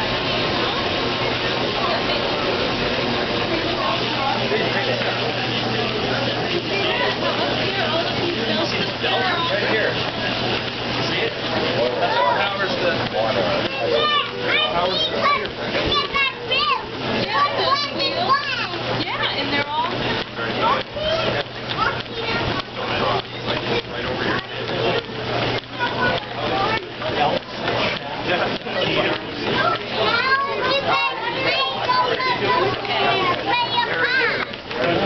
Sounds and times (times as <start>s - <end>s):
Speech: 0.0s - 35.0s.